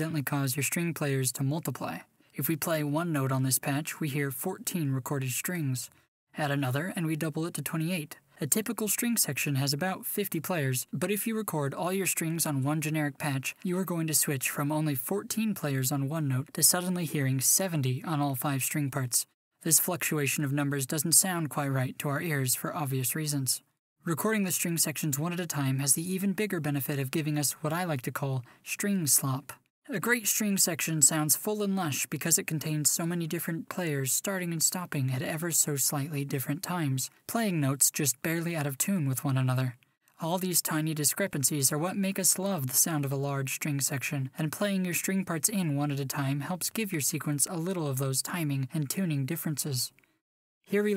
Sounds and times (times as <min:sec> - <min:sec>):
Speech: 0:00.0 - 0:50.0, 0:50.7 - 0:50.9.